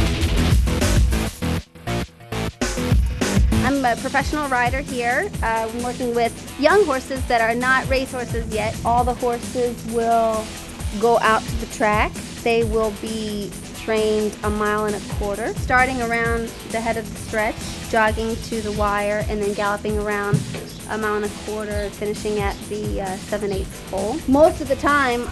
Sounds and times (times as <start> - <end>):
Music: 0.0 - 25.3
Speech: 3.6 - 25.3.